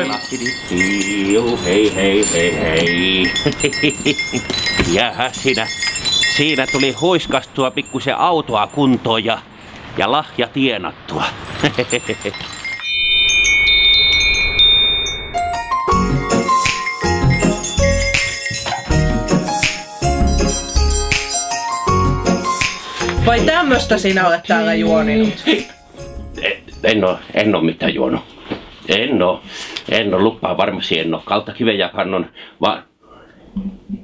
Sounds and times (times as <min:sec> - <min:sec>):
Jingle, tinkle: 0:00.0 - 0:09.2, 0:11.4 - 0:27.2.